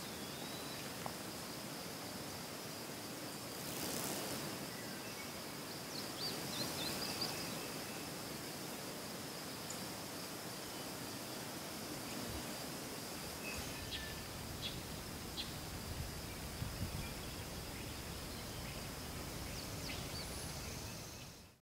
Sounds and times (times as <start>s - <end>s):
Rustling leaves: 0.0s - 21.6s.